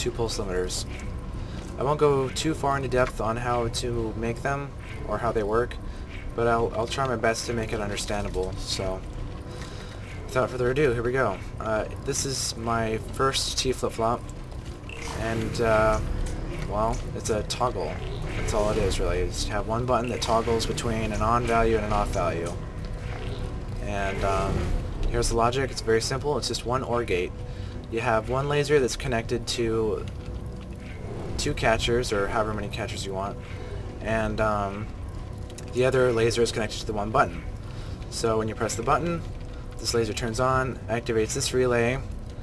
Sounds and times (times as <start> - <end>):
Speech: 0.0 - 1.0, 1.8 - 5.8, 6.4 - 9.1, 10.3 - 14.2, 15.1 - 16.0, 16.6 - 22.6, 23.8 - 27.3, 27.9 - 30.1, 31.4 - 33.4, 34.0 - 34.9, 35.7 - 37.5, 38.1 - 42.1
Music: 0.0 - 42.4.